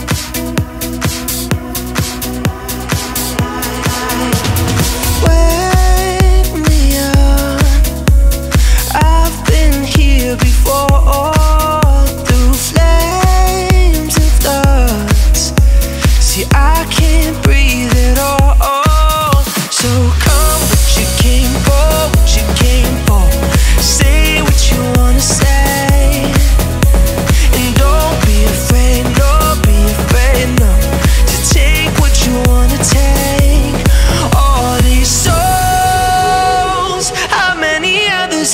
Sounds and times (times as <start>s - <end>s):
Music: 0.0s - 38.5s.